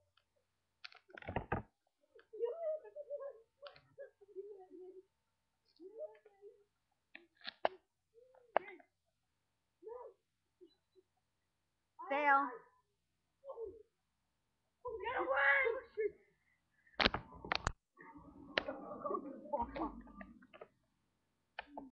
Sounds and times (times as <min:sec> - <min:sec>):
Speech: 0:02.2 - 0:05.1, 0:05.7 - 0:06.7, 0:08.2 - 0:08.9, 0:09.8 - 0:10.2, 0:12.0 - 0:12.8, 0:14.8 - 0:16.3, 0:18.0 - 0:20.3.